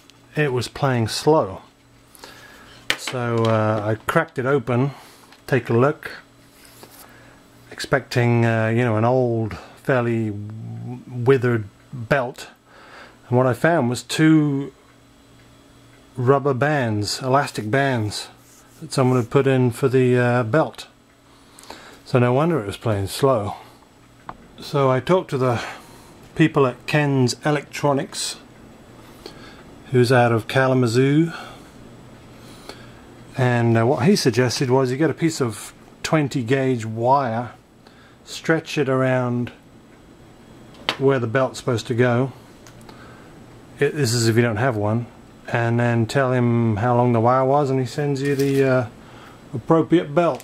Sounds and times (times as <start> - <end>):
Speech: 0.3 - 1.7, 3.0 - 6.3, 7.7 - 12.6, 13.3 - 14.8, 16.2 - 21.0, 22.1 - 23.7, 24.6 - 25.8, 26.4 - 28.5, 29.9 - 31.5, 33.3 - 37.6, 38.2 - 39.6, 41.0 - 42.4, 43.8 - 50.4.